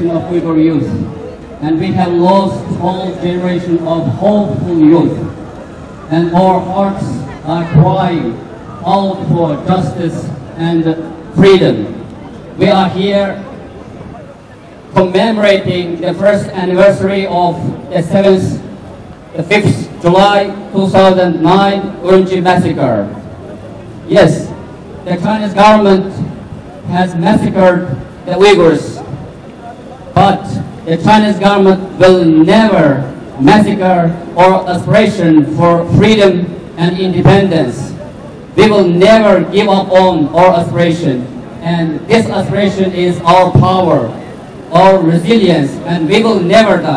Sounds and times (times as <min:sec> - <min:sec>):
Speech: 0:00.0 - 0:05.3, 0:06.1 - 0:12.0, 0:12.6 - 0:13.5, 0:15.0 - 0:18.7, 0:19.4 - 0:23.2, 0:24.1 - 0:46.9.